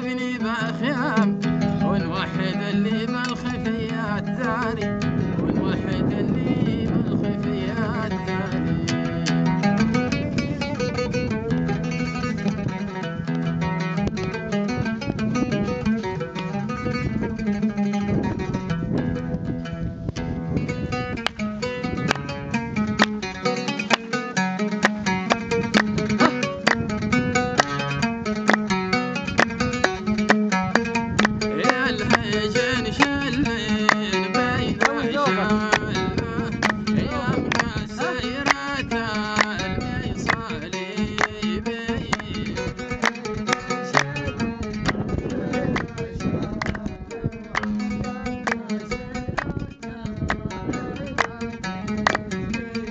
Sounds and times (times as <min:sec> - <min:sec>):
Music: 0:00.0 - 0:52.9.